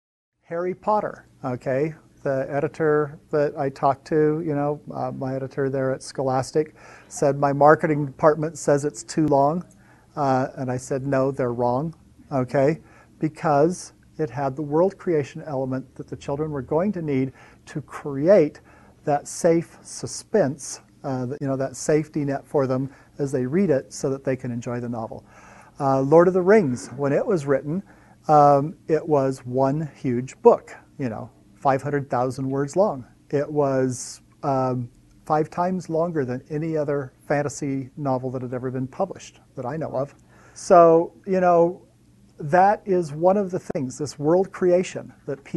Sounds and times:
Speech: 0:00.5 - 0:45.5.

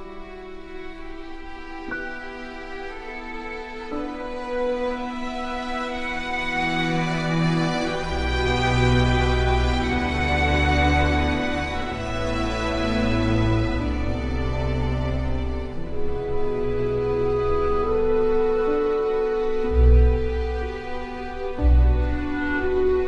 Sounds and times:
Music: 0:00.0 - 0:23.0.

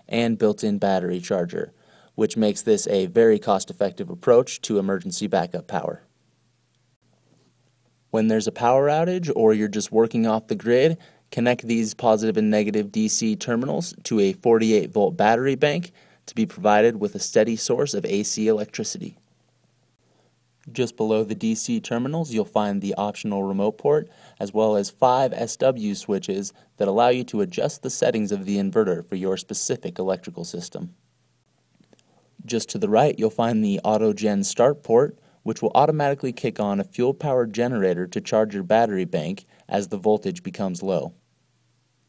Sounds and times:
Speech: 0:00.0 - 0:06.1, 0:08.1 - 0:19.2, 0:20.7 - 0:31.0, 0:32.4 - 0:41.2.

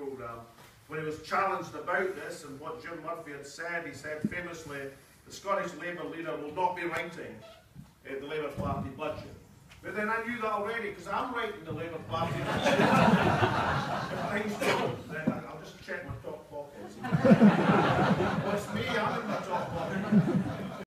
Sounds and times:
Speech: 0:00.0 - 0:13.1, 0:14.1 - 0:17.1, 0:18.4 - 0:20.2.

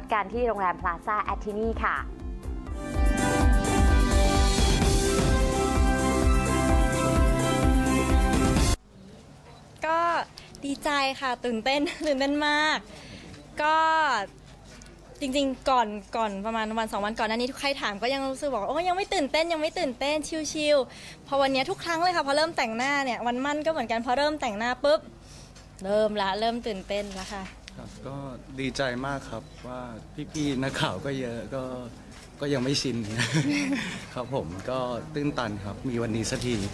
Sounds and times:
Music: 0:00.0 - 0:08.8.

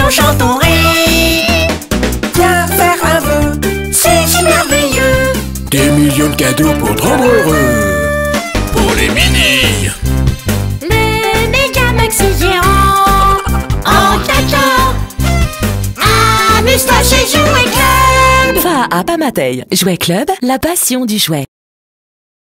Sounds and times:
Music: 0:00.0 - 0:21.2
Speech: 0:05.7 - 0:08.0, 0:08.8 - 0:10.0, 0:18.6 - 0:21.5.

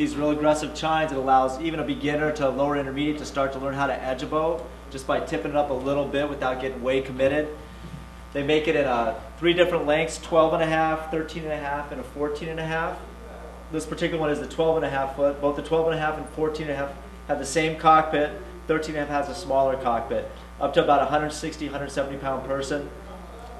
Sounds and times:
Speech: 0:00.0 - 0:07.6, 0:08.4 - 0:23.5.

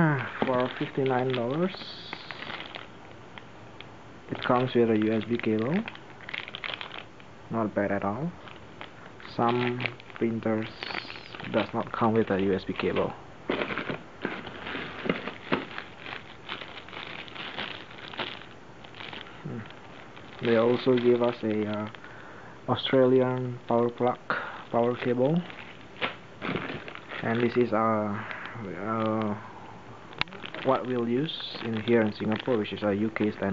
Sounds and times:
Speech: 0:00.0 - 0:02.5, 0:04.3 - 0:06.0, 0:07.5 - 0:08.4, 0:09.3 - 0:13.2, 0:19.4 - 0:19.7, 0:20.4 - 0:22.0, 0:22.7 - 0:25.5, 0:27.2 - 0:29.5, 0:30.2 - 0:33.5
Inside, small room: 0:00.0 - 0:33.5.

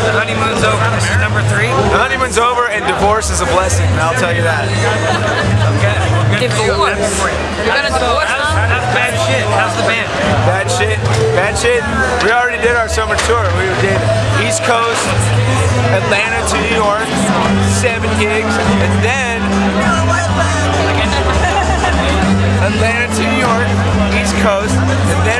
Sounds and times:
Music: 0:00.0 - 0:25.3
Speech: 0:00.0 - 0:25.3.

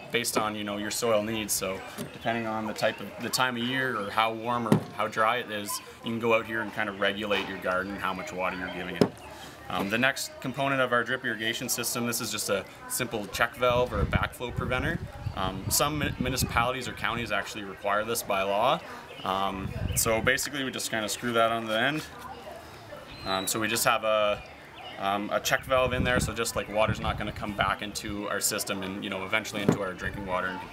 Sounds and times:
Speech: 0:00.0 - 0:30.7.

